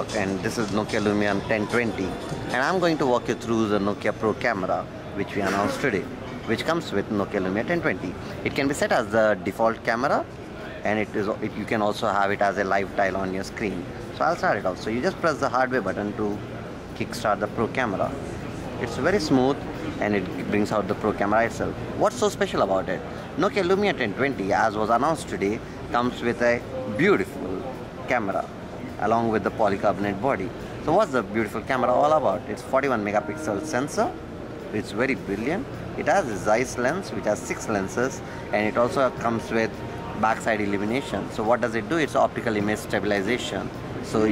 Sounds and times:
Speech: 0.0s - 44.3s.

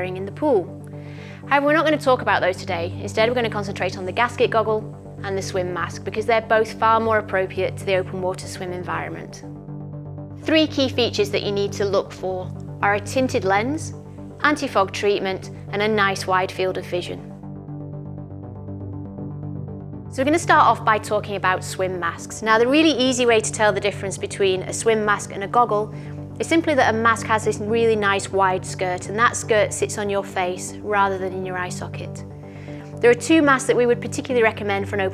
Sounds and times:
Speech: 0.0s - 0.7s, 1.5s - 9.4s, 10.4s - 17.3s, 20.2s - 32.2s, 33.0s - 35.1s
Music: 0.0s - 35.1s.

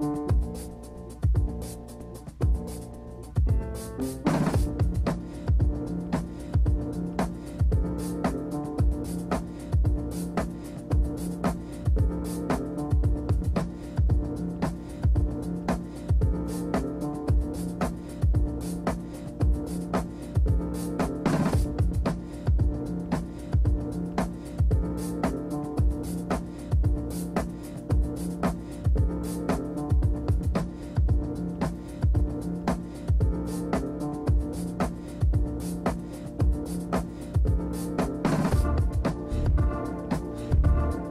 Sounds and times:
Music: 0.0s - 41.1s.

